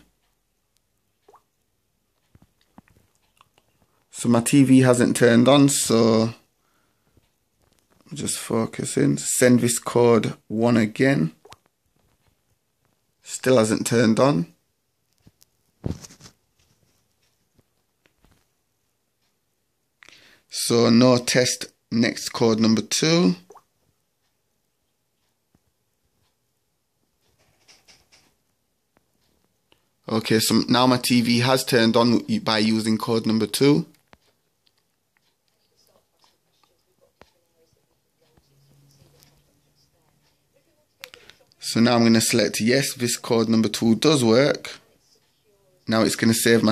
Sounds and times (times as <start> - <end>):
Inside, small room: 0.0 - 46.7
Speech: 4.1 - 6.5, 8.0 - 11.4, 13.2 - 14.6, 20.5 - 23.5, 30.0 - 34.0, 35.5 - 46.7.